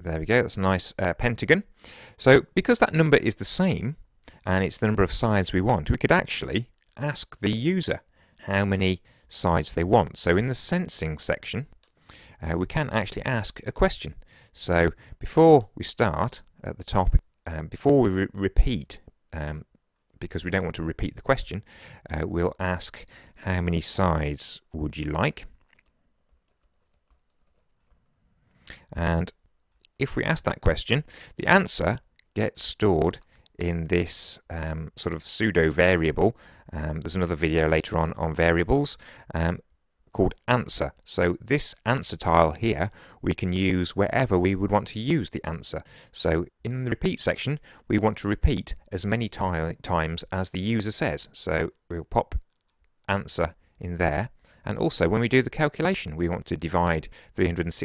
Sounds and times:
Speech: 0:00.0 - 0:11.8, 0:12.4 - 0:25.6, 0:28.9 - 0:29.4, 0:30.0 - 0:52.5, 0:53.1 - 0:57.8.

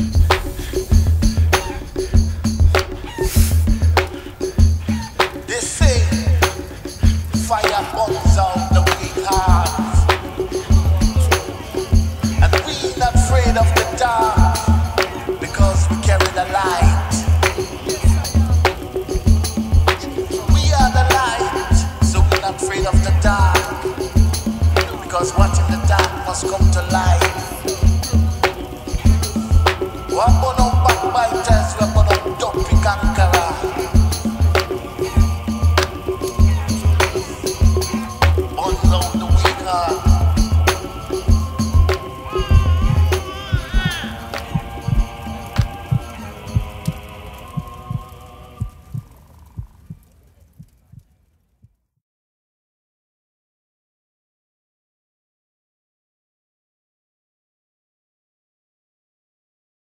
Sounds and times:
Music: 0:00.0 - 0:49.5.

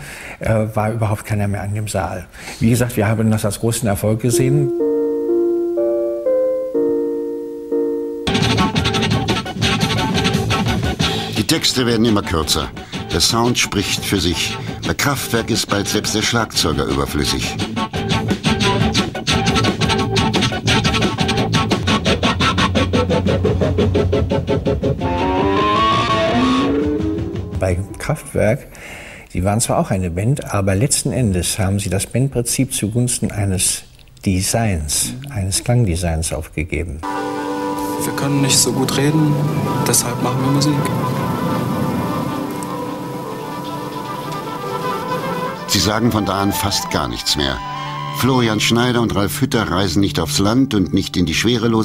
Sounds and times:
Speech: 0:00.4 - 0:04.7, 0:11.4 - 0:17.6, 0:27.6 - 0:28.7, 0:29.3 - 0:37.0, 0:38.0 - 0:40.9, 0:45.7 - 0:47.6, 0:48.2 - 0:51.8
Music: 0:04.3 - 0:28.4, 0:37.0 - 0:51.8.

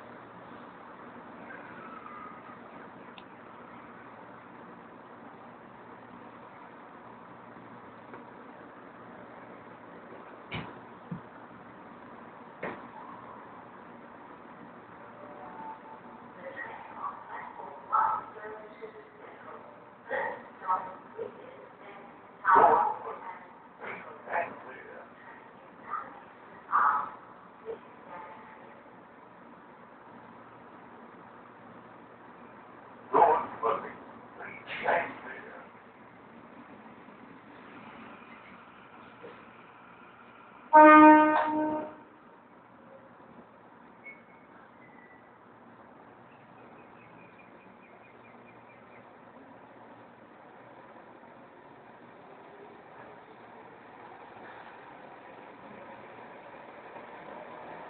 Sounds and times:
Outside, urban or manmade: 0:00.0 - 0:57.8
Train: 0:00.0 - 0:57.8.

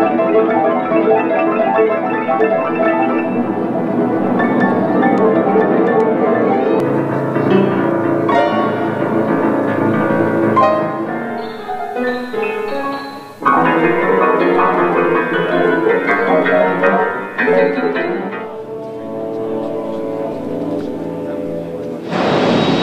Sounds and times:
Electronica: 0:00.0 - 0:21.2.

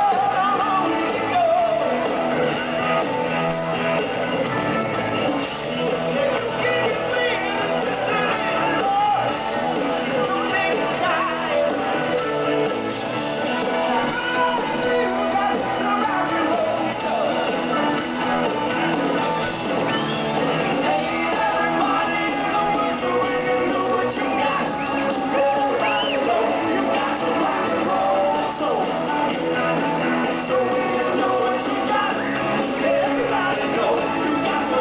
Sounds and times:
Heavy metal: 0:00.0 - 0:34.8
Progressive rock: 0:00.0 - 0:34.8
Punk rock: 0:00.0 - 0:34.8
Rock and roll: 0:00.0 - 0:34.8.

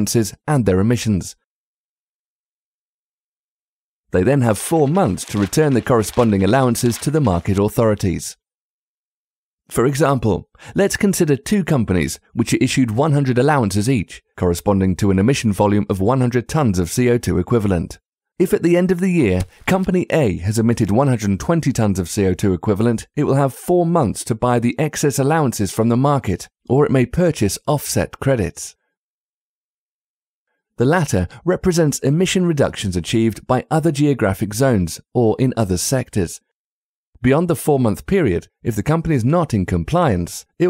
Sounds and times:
Speech synthesizer: 0:00.0 - 0:01.4, 0:04.2 - 0:08.4, 0:09.7 - 0:28.8, 0:30.8 - 0:36.4, 0:37.2 - 0:40.7.

